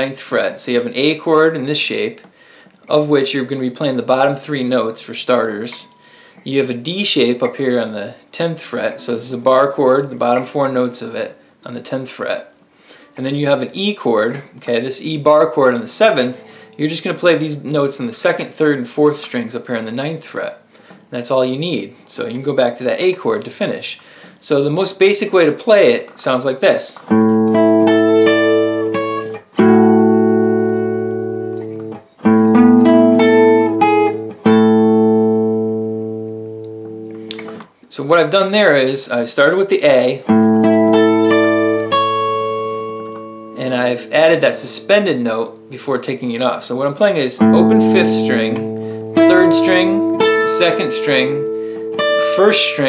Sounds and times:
Speech: 0.0 - 2.2, 2.9 - 12.6, 13.2 - 27.1, 37.9 - 40.3, 43.6 - 51.5, 52.2 - 52.8
Acoustic guitar: 0.0 - 11.8, 14.2 - 21.2, 25.9 - 37.8, 39.8 - 52.8.

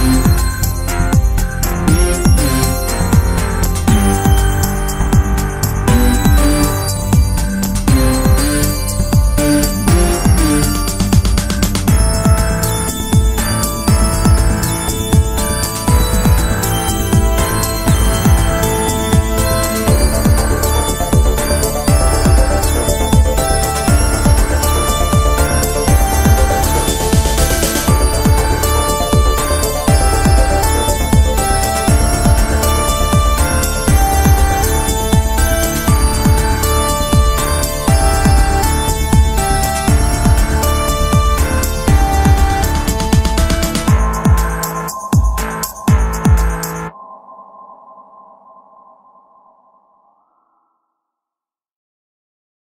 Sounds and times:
Drum machine: 0.0 - 46.9.

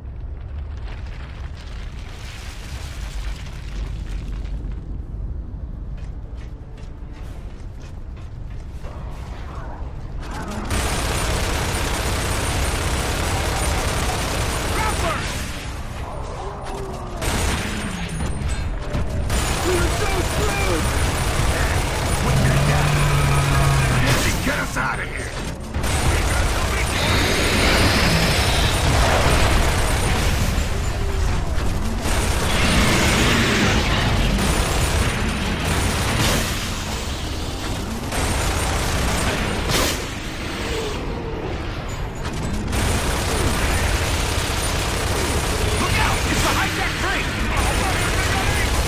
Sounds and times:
Speech: 19.6 - 20.9, 21.5 - 25.4, 45.8 - 48.8.

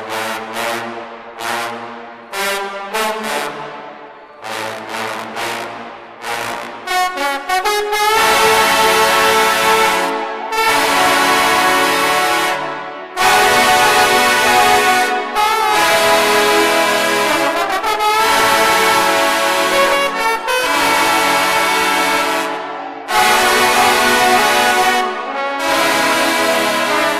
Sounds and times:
Trombone: 0.0 - 3.8, 4.4 - 27.1.

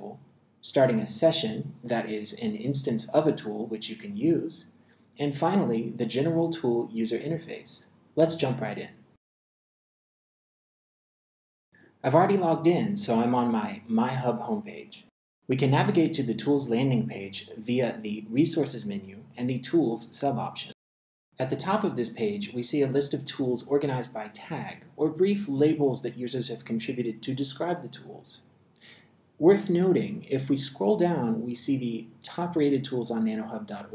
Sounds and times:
Speech: 0.0 - 9.0, 12.0 - 20.8, 21.4 - 28.4, 29.4 - 33.9.

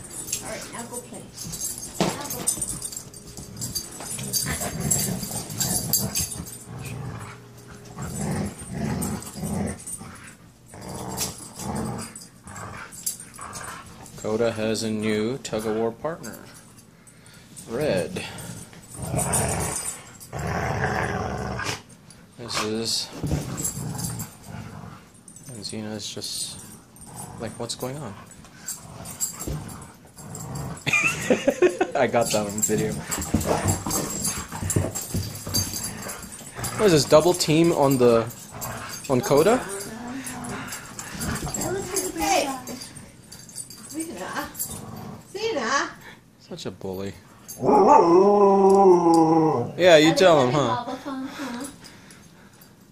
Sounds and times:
Inside, small room: 0.0 - 52.9
Roar: 19.0 - 21.8, 47.6 - 49.8.

